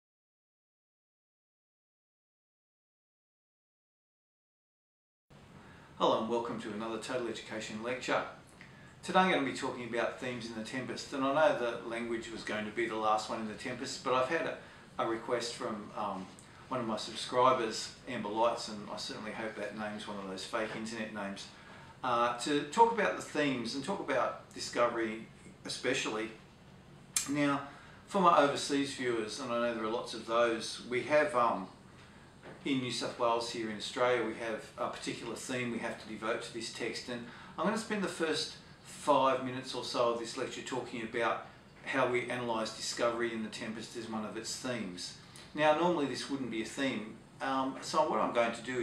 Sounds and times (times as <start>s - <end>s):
Inside, small room: 5.3s - 48.8s
Speech: 6.0s - 8.4s, 9.0s - 26.4s, 27.2s - 31.8s, 32.6s - 48.8s.